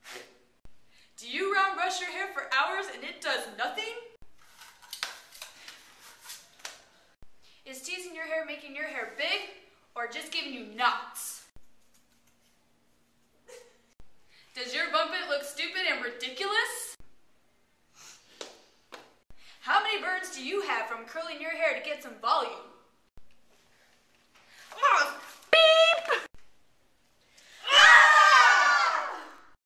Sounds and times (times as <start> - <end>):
Speech: 7.7 - 11.5, 19.6 - 22.8, 24.8 - 26.3.